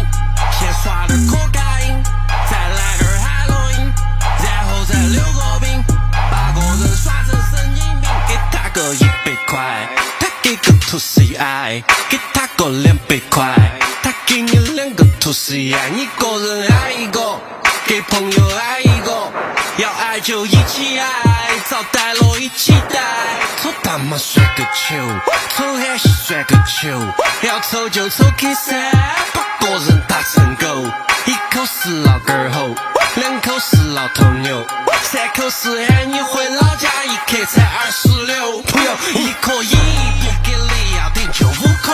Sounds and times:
Music: 0:00.0 - 0:41.9.

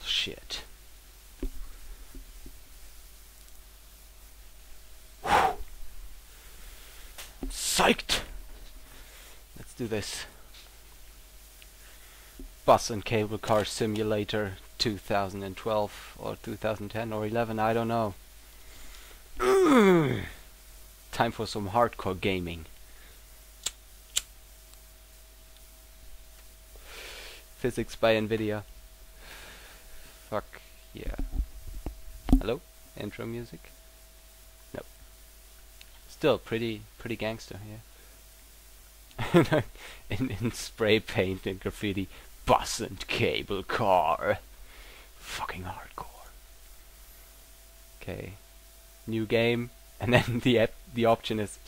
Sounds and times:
Speech: 0:00.0 - 0:00.7, 0:07.5 - 0:08.3, 0:09.6 - 0:10.4, 0:12.6 - 0:18.2, 0:21.1 - 0:22.7, 0:27.6 - 0:28.7, 0:30.3 - 0:31.2, 0:32.4 - 0:33.7, 0:36.1 - 0:37.8, 0:39.3 - 0:44.4, 0:45.2 - 0:46.3, 0:48.0 - 0:48.4, 0:49.1 - 0:51.6.

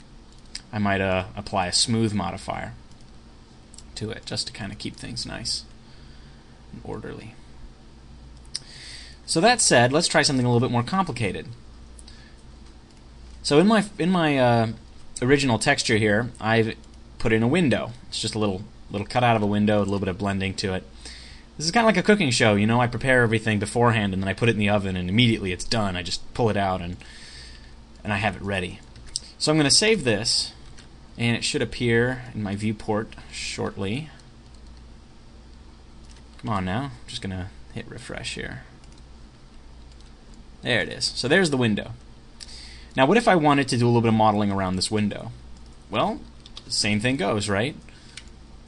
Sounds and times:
Speech: 0:00.6 - 0:02.8, 0:04.0 - 0:05.7, 0:06.7 - 0:07.4, 0:09.3 - 0:11.6, 0:13.4 - 0:20.9, 0:21.6 - 0:27.0, 0:28.0 - 0:28.8, 0:29.4 - 0:30.6, 0:31.2 - 0:34.2, 0:36.4 - 0:38.8, 0:40.6 - 0:42.0, 0:43.0 - 0:47.8.

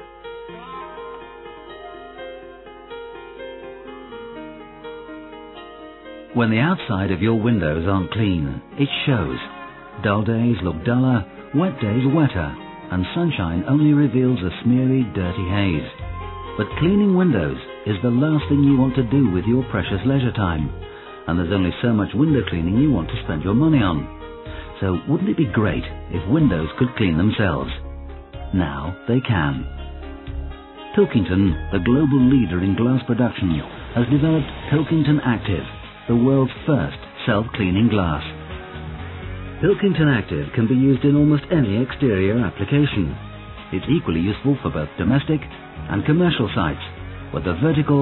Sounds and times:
Music: 0:00.0 - 0:48.0
Speech: 0:06.4 - 0:16.0, 0:16.6 - 0:20.7, 0:21.3 - 0:24.1, 0:24.8 - 0:27.8, 0:28.5 - 0:29.7, 0:30.9 - 0:38.4, 0:39.6 - 0:43.2, 0:43.8 - 0:48.0.

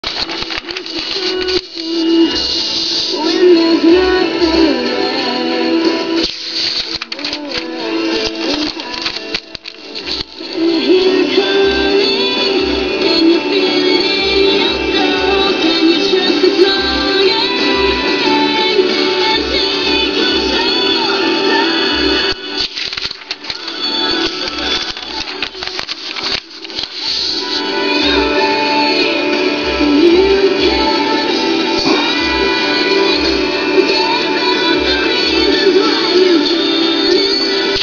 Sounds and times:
Typewriter: 0:00.0 - 0:02.1, 0:06.2 - 0:10.4, 0:22.3 - 0:27.4.

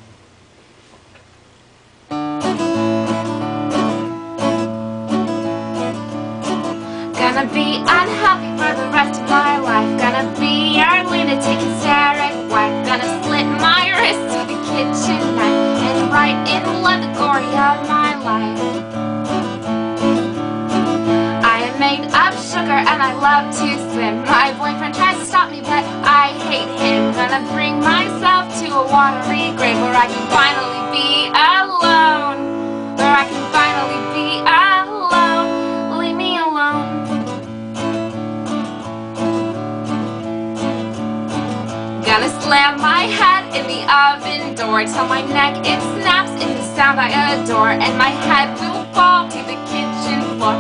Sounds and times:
Music: 0:02.1 - 0:50.6.

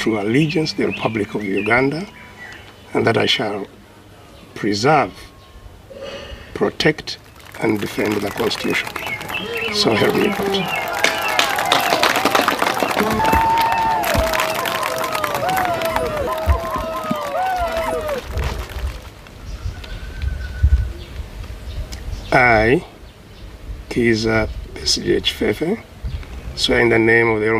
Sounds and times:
Male speech, man speaking: 0:00.0 - 0:02.1, 0:02.9 - 0:03.7, 0:04.6 - 0:05.3, 0:06.6 - 0:08.9, 0:09.6 - 0:10.7, 0:22.3 - 0:22.9, 0:23.9 - 0:25.8, 0:26.6 - 0:27.5
Narration, monologue: 0:06.5 - 0:10.7.

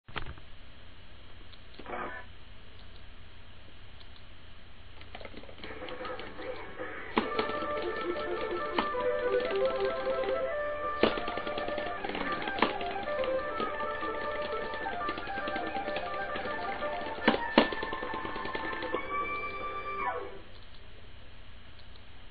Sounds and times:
Music: 0:05.6 - 0:20.5.

